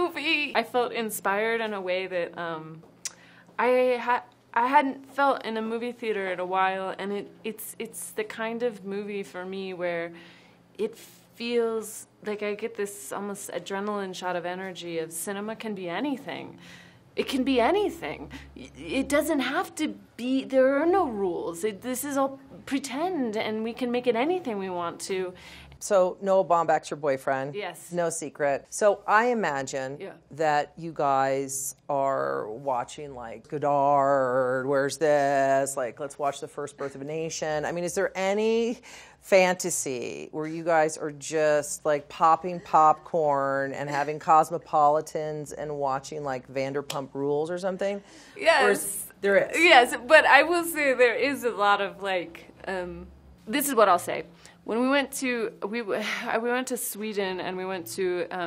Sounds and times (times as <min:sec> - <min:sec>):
Female speech, woman speaking: 0:00.0 - 0:02.9, 0:03.6 - 0:10.2, 0:10.8 - 0:16.6, 0:17.2 - 0:58.4.